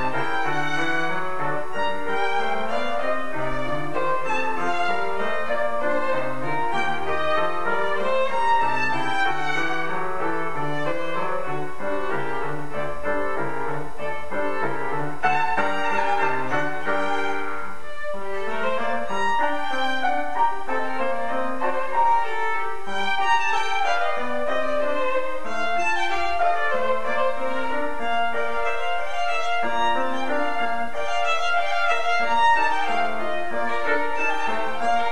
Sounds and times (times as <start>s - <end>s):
Violin, fiddle: 0.0s - 35.1s.